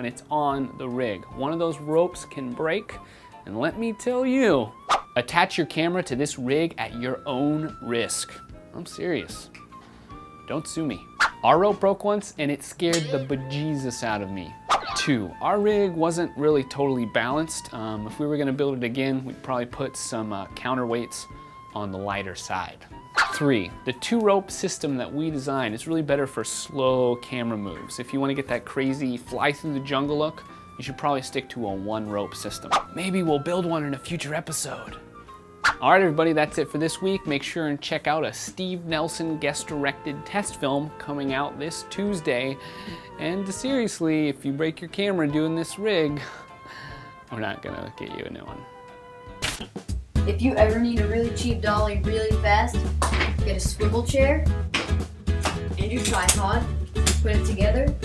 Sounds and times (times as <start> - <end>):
Speech: 0.0 - 9.5, 10.5 - 35.0, 35.8 - 42.6, 43.2 - 46.2, 47.3 - 48.6, 50.3 - 54.5, 55.8 - 58.0
Music: 0.0 - 58.0.